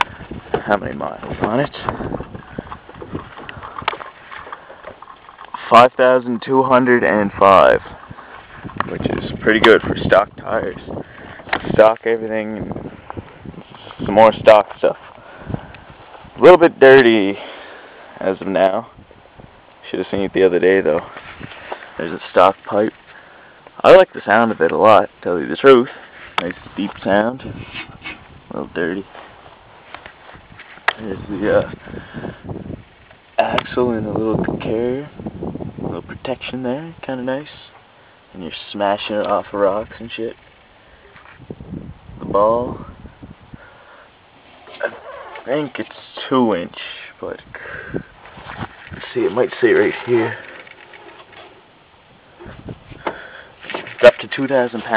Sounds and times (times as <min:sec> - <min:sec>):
Speech: 0:00.6 - 0:01.9, 0:05.6 - 0:07.9, 0:08.9 - 0:10.9, 0:11.6 - 0:12.7, 0:14.0 - 0:15.0, 0:16.4 - 0:17.4, 0:18.2 - 0:18.9, 0:19.8 - 0:21.1, 0:22.0 - 0:22.9, 0:23.8 - 0:27.4, 0:28.5 - 0:29.1, 0:31.0 - 0:31.8, 0:33.4 - 0:35.2, 0:35.9 - 0:40.4, 0:42.2 - 0:42.9, 0:44.8 - 0:47.5, 0:49.0 - 0:50.4, 0:54.0 - 0:54.9.